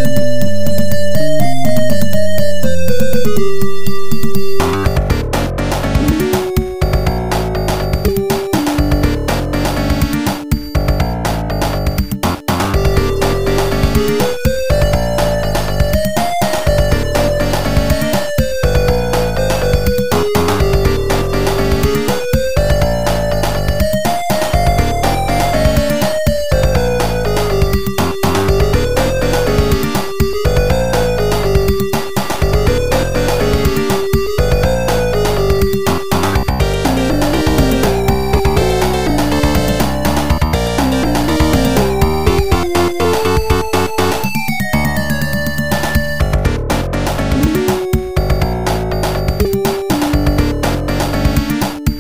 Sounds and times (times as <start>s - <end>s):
Theme music: 0.0s - 52.0s.